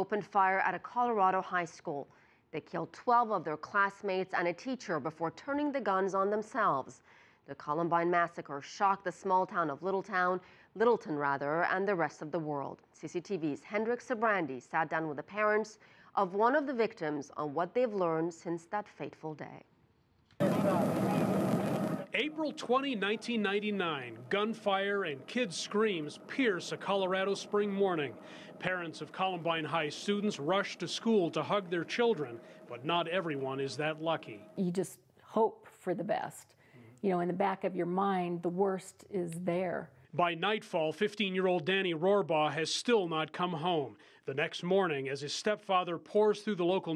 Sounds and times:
Speech: 0.0s - 19.7s, 20.4s - 21.3s, 22.0s - 46.9s.

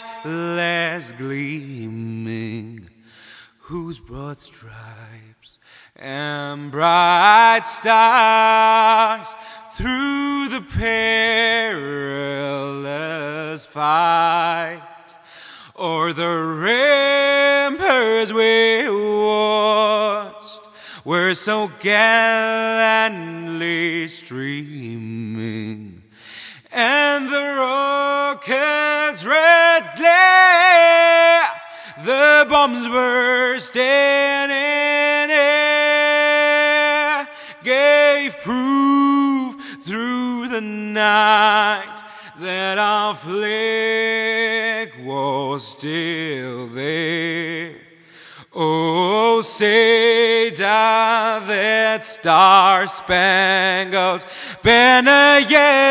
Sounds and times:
Male singing: 0.0s - 3.0s, 3.6s - 15.0s, 15.8s - 26.0s, 26.7s - 47.9s, 48.5s - 55.9s.

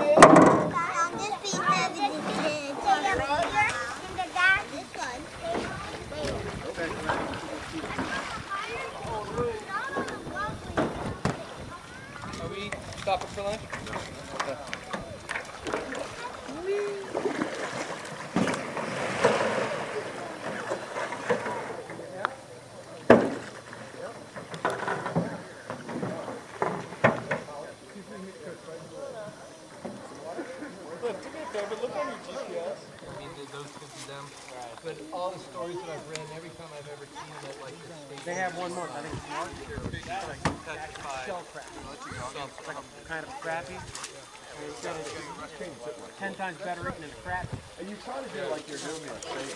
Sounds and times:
Rowboat, canoe, kayak: 0.0s - 49.5s.

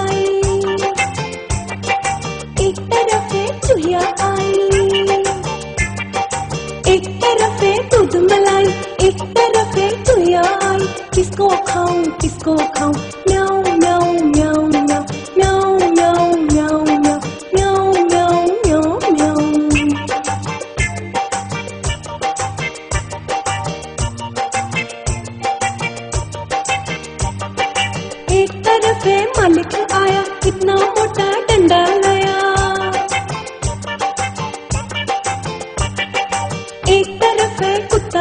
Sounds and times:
Music: 0.0s - 38.2s.

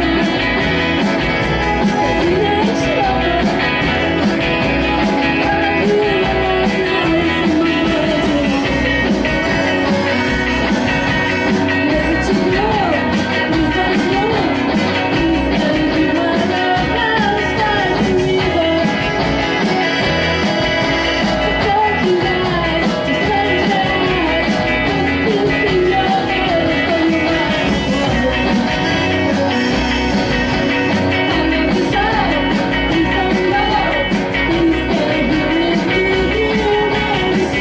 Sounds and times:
Country: 0.0s - 37.6s.

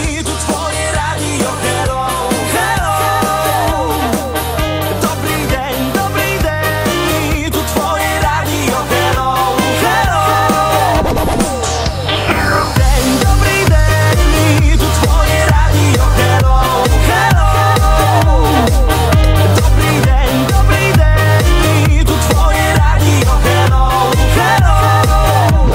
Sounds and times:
Music: 0.0s - 25.7s.

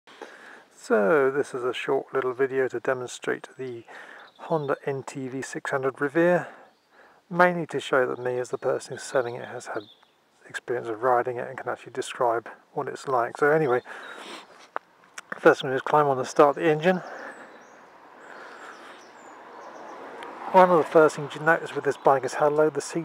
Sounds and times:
Outside, urban or manmade: 0.0s - 23.0s
Speech: 0.8s - 6.6s, 7.3s - 13.9s, 15.2s - 17.3s, 20.5s - 23.0s.

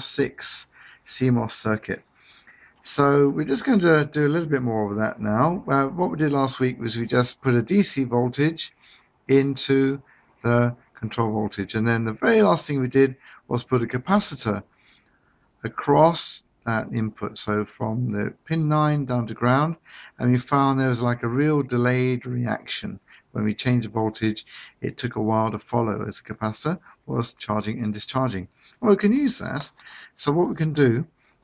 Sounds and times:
Speech: 0.0s - 2.0s, 2.8s - 14.7s, 15.6s - 31.2s.

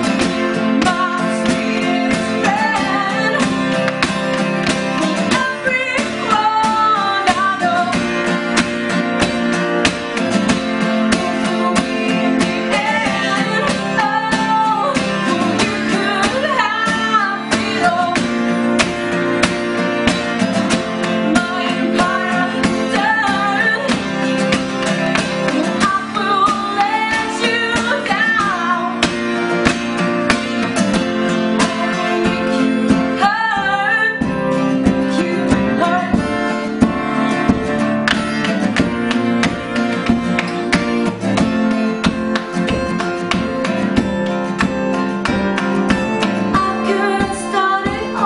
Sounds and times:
Country: 0.0s - 48.2s
Flamenco: 0.0s - 48.2s
Singing: 21.2s - 24.1s, 31.5s - 37.6s, 46.5s - 48.2s.

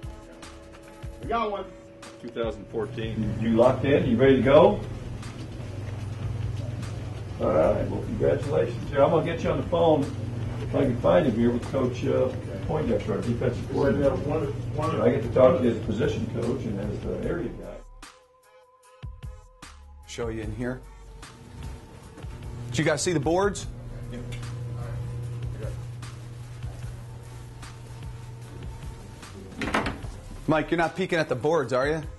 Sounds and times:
Speech: 1.2s - 4.8s, 7.4s - 17.8s, 20.1s - 20.8s, 22.7s - 25.8s, 30.5s - 32.1s.

